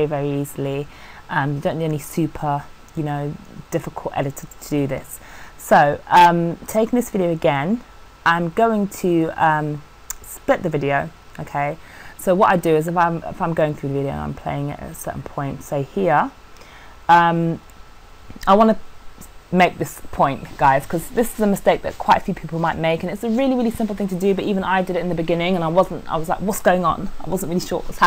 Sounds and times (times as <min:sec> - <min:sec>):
Speech: 0:00.0 - 0:16.4, 0:17.1 - 0:17.6, 0:18.4 - 0:18.8, 0:19.5 - 0:28.0.